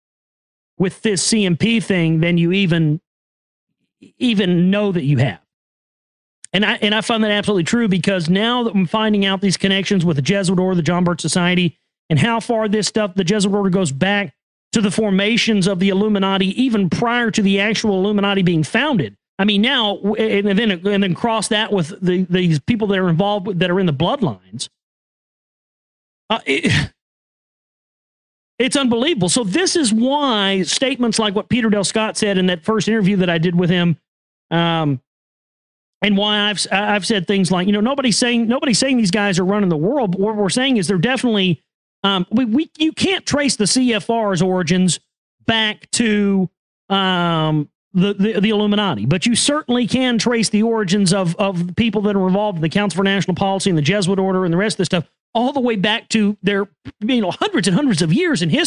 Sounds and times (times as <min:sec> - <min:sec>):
Speech: 0:00.8 - 0:03.1, 0:04.0 - 0:05.5, 0:06.4 - 0:24.8, 0:26.3 - 0:27.0, 0:28.6 - 0:35.1, 0:36.0 - 0:58.6.